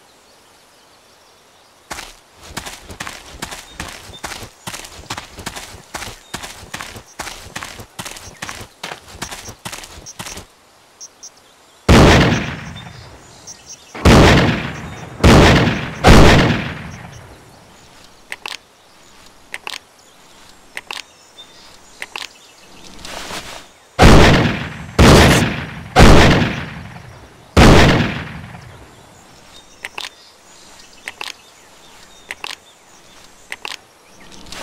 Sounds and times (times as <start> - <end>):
Outside, rural or natural: 0.0 - 34.6.